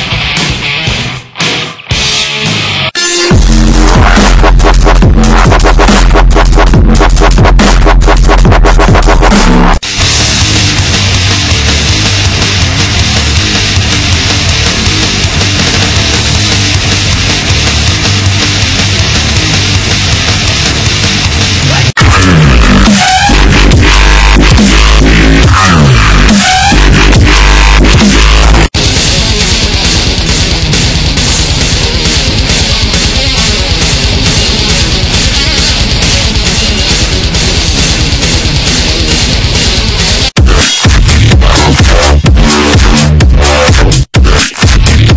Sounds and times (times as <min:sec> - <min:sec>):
Dubstep: 0:03.0 - 0:45.1.